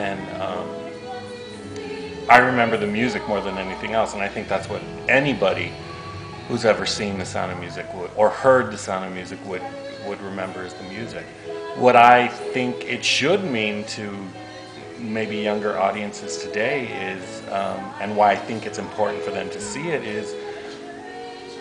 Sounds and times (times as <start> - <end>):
Music: 0.0 - 21.6
Speech: 2.3 - 5.7, 6.5 - 11.2, 11.8 - 14.3, 15.0 - 20.4.